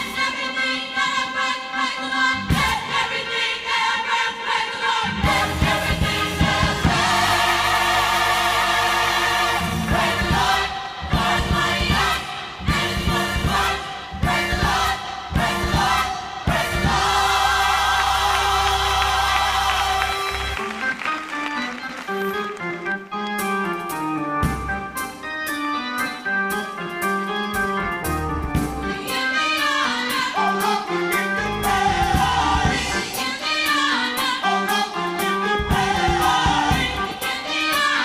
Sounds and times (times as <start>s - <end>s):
Choir: 0.0s - 20.6s, 28.8s - 38.0s.